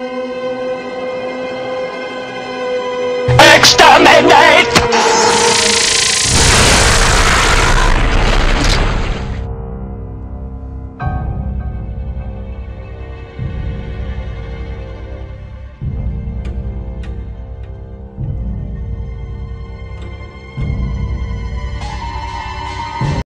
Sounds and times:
Music: 0.0 - 23.2.

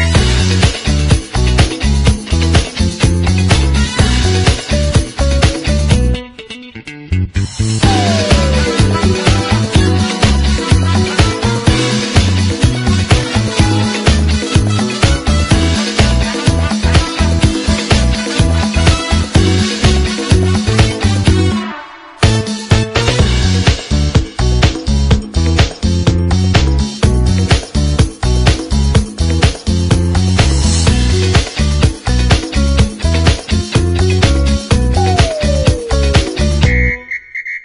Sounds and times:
Dance music: 0.0 - 6.4, 7.5 - 37.0.

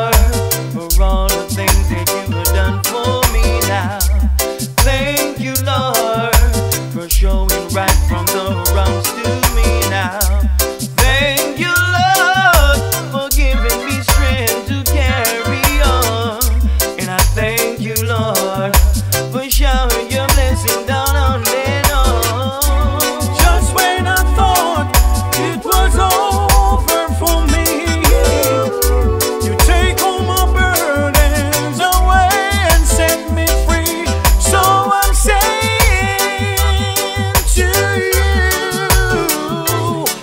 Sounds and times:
Male singing: 0.0 - 40.2
Music: 0.0 - 40.2.

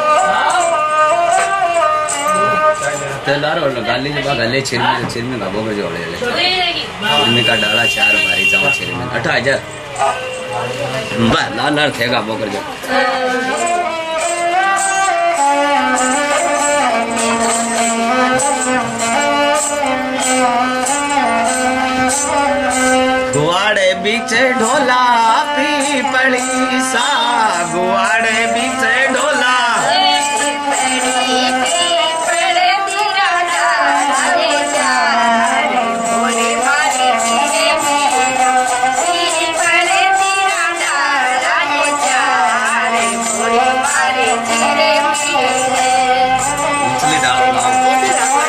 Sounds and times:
Music: 0.0 - 4.7, 12.8 - 48.4.

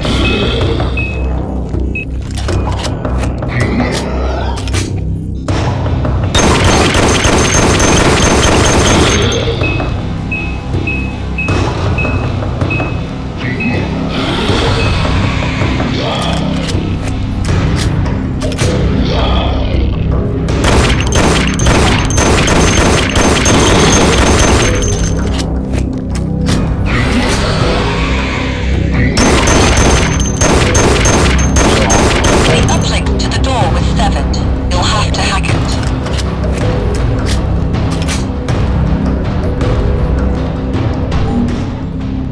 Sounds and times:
Music: 0.0 - 42.3.

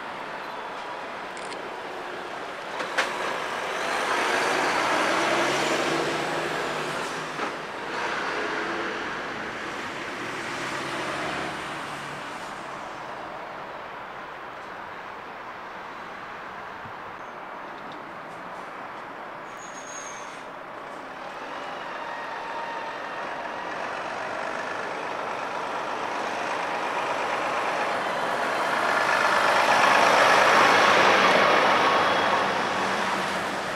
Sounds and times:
Outside, urban or manmade: 0.0 - 33.7
Truck: 0.0 - 33.7.

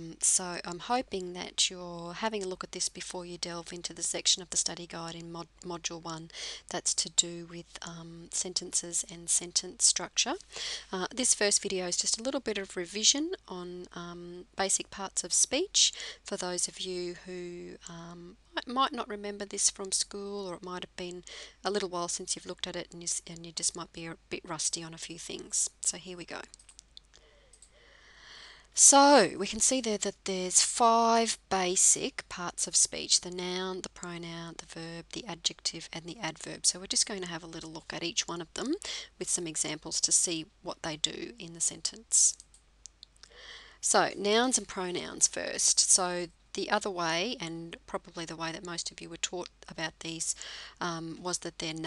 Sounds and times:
Female speech, woman speaking: 0.0 - 10.4, 11.0 - 26.5, 28.8 - 42.4, 43.8 - 51.8
Narration, monologue: 0.0 - 51.8.

